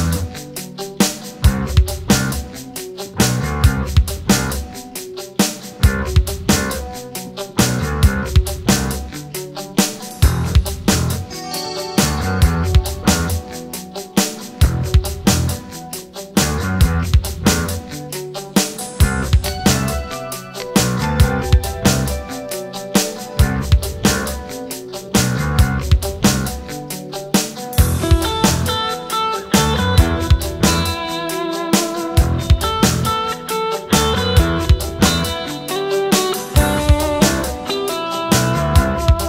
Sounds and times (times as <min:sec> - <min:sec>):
Music: 0:00.0 - 0:39.2.